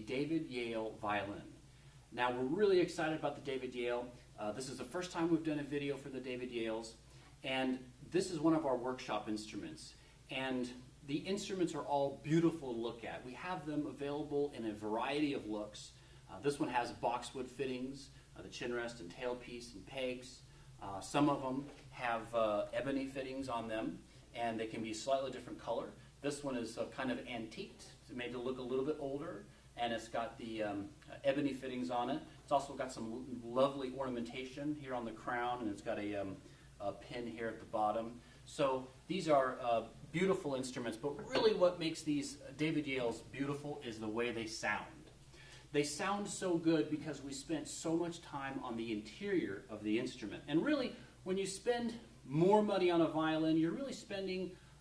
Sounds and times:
Speech: 0.0 - 54.6.

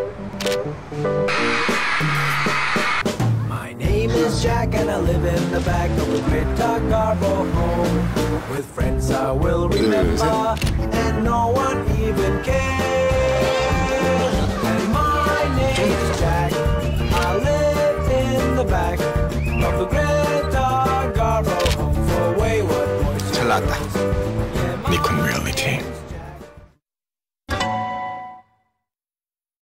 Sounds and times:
Music: 0.0 - 26.8, 27.5 - 28.8
Speech: 9.8 - 10.4, 23.3 - 23.8, 24.8 - 26.0.

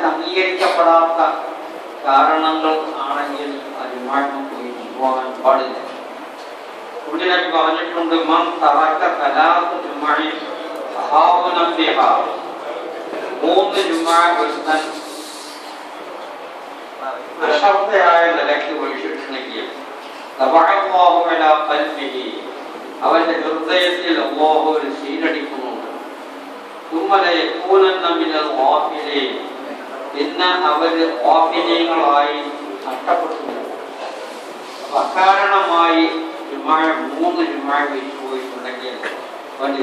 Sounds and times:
Male speech, man speaking: 0.0 - 5.9, 7.1 - 15.1, 17.0 - 19.8, 20.4 - 25.9, 26.9 - 33.8, 34.9 - 39.8
Narration, monologue: 0.0 - 39.8.

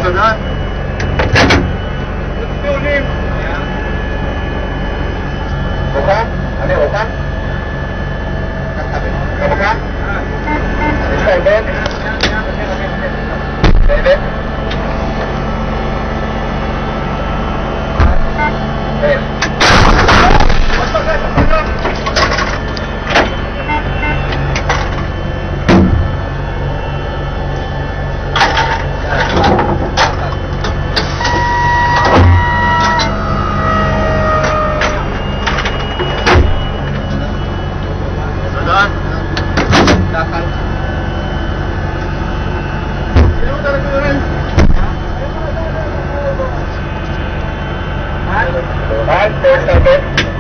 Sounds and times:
Artillery fire: 19.6 - 20.8.

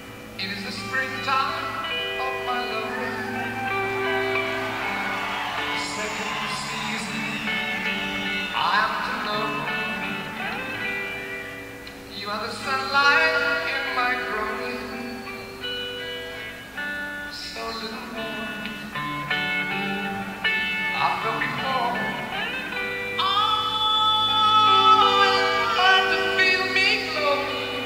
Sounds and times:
Music: 0.0 - 27.8
Speech: 0.4 - 3.6.

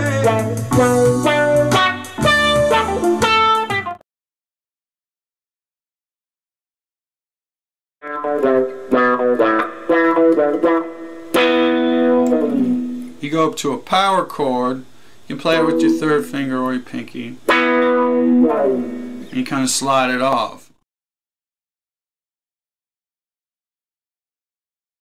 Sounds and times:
Guitar: 0.0 - 4.0, 8.0 - 20.7.

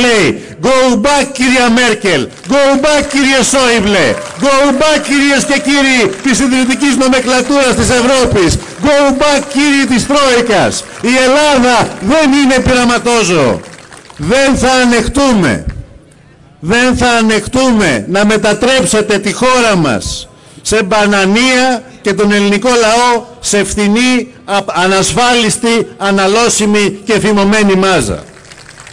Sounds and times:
Male speech, man speaking: 0.0 - 13.6, 14.2 - 15.7, 16.6 - 28.3
Narration, monologue: 0.0 - 28.4.

